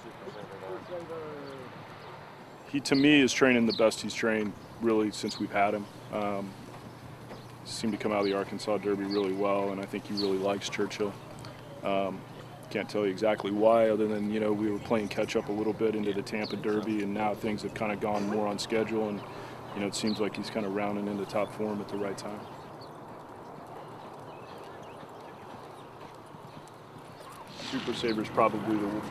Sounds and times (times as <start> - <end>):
Speech: 0.0 - 1.7, 2.7 - 6.6, 7.7 - 11.2, 11.9 - 22.5, 27.6 - 29.1
Clip-clop: 0.0 - 29.1.